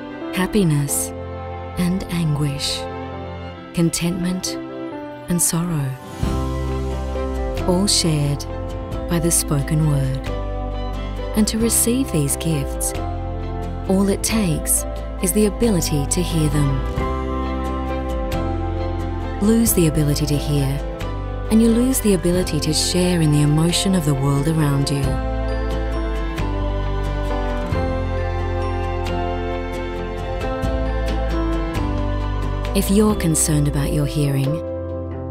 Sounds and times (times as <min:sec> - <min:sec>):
Music: 0:00.0 - 0:35.3
Speech: 0:00.4 - 0:01.1, 0:01.8 - 0:02.9, 0:03.8 - 0:04.6, 0:05.3 - 0:06.0, 0:07.6 - 0:08.5, 0:09.1 - 0:10.3, 0:11.4 - 0:13.0, 0:13.9 - 0:16.9, 0:19.4 - 0:20.8, 0:21.5 - 0:25.2, 0:32.8 - 0:34.6.